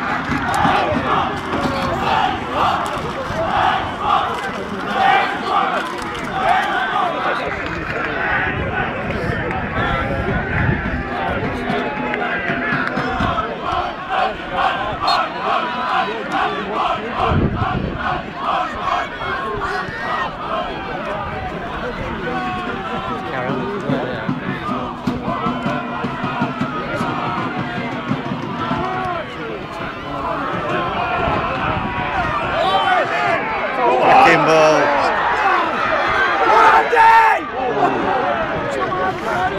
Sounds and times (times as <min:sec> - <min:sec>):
Speech: 0:00.5 - 0:39.5.